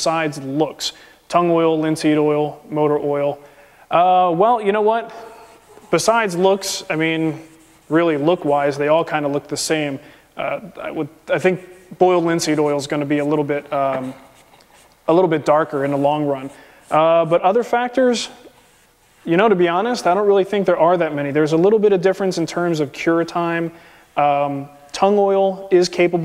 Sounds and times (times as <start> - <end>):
Speech: 0.0 - 14.3, 15.1 - 18.5, 19.2 - 26.2.